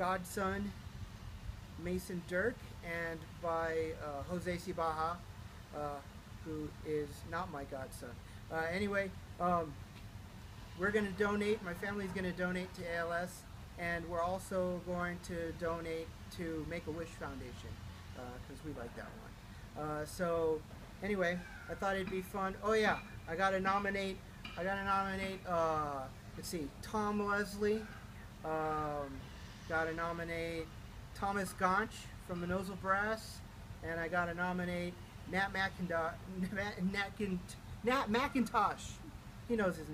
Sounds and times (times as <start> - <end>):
Speech: 0.0 - 0.8, 1.8 - 9.8, 10.8 - 39.9.